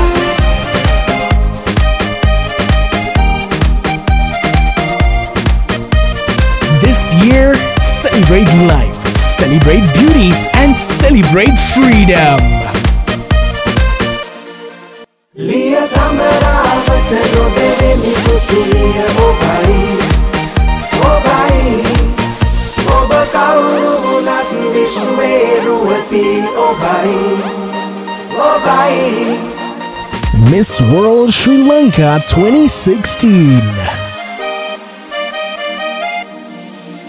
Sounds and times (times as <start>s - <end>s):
Afrobeat: 6.3s - 13.8s, 30.1s - 34.5s
Speech: 6.7s - 12.7s, 30.3s - 34.1s.